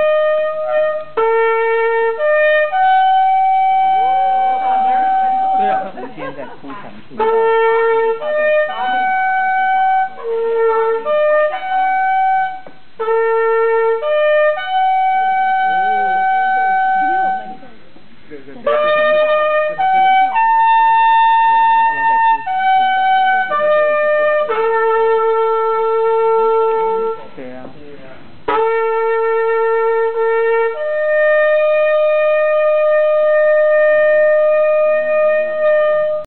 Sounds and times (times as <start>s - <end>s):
Music: 0.0s - 6.2s, 7.2s - 17.7s, 18.6s - 27.4s, 28.4s - 36.2s.